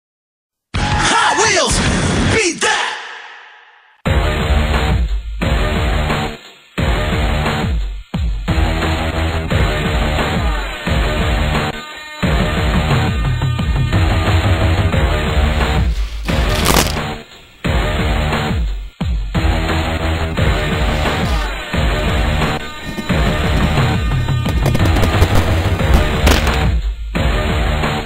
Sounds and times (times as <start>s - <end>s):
Music: 4.0s - 28.0s.